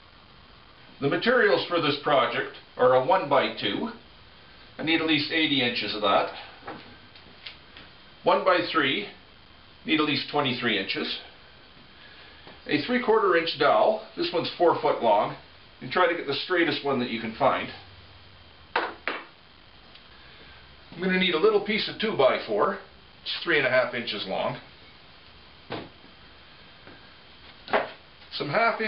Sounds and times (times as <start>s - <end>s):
Speech: 1.0s - 4.0s, 4.8s - 6.5s, 8.2s - 9.2s, 9.8s - 11.3s, 12.6s - 17.9s, 21.0s - 24.7s, 28.3s - 28.8s.